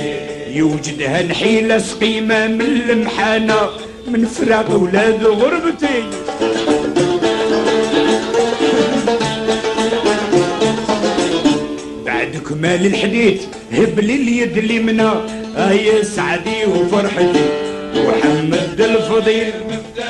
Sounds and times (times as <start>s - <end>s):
Middle Eastern music: 0.0s - 20.0s.